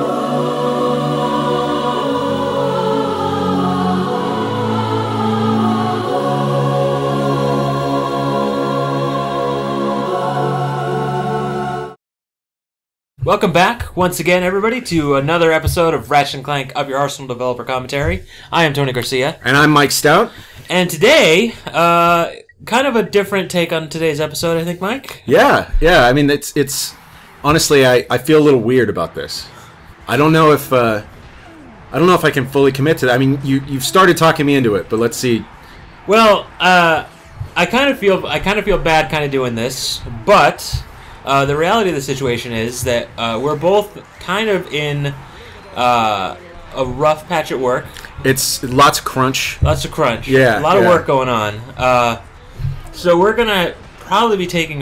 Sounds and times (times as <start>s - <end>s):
Speech: 13.2s - 29.5s, 30.1s - 31.1s, 32.0s - 35.5s, 36.1s - 52.2s, 52.9s - 54.8s.